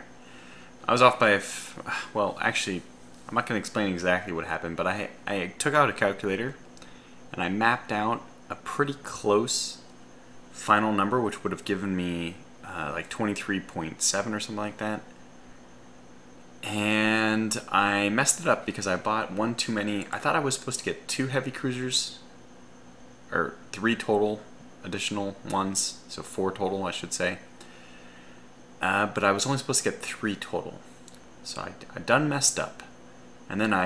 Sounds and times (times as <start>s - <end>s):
Speech: 0.8s - 6.6s, 7.3s - 9.8s, 10.6s - 15.1s, 16.6s - 22.3s, 23.3s - 27.5s, 28.8s - 30.8s, 31.4s - 32.9s, 33.5s - 33.8s.